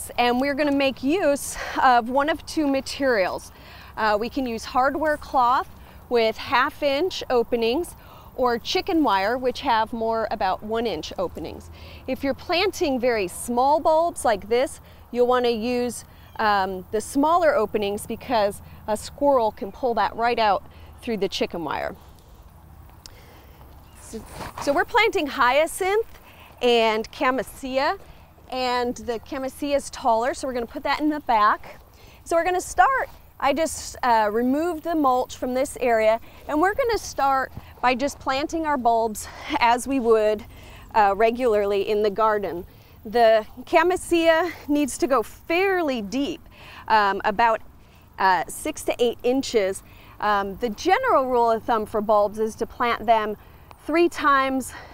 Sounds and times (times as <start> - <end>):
Speech: 0.0 - 22.0, 24.1 - 47.6, 48.2 - 54.8.